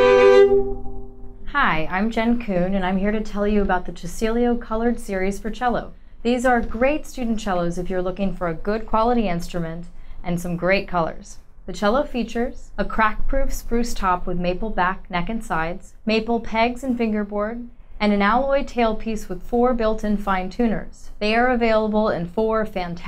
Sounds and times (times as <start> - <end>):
Speech: 1.5 - 23.0.